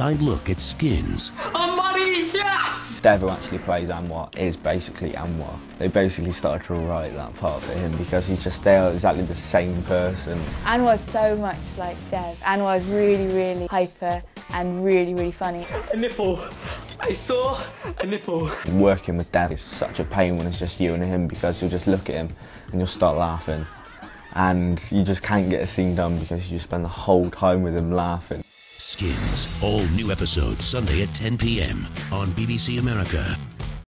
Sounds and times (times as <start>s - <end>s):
Music: 0.0s - 33.8s
Speech: 24.6s - 33.5s.